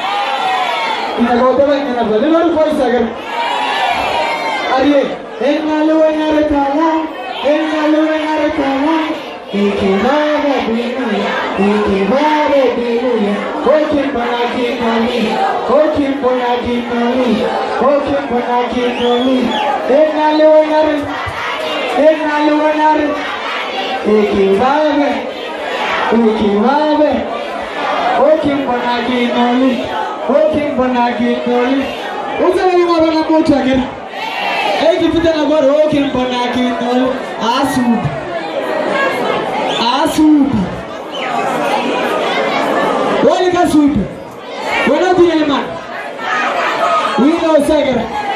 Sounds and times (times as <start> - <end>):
Speech: 26.1 - 27.3, 28.1 - 33.9, 34.8 - 38.3, 43.2 - 44.2, 44.8 - 45.8, 47.1 - 48.2.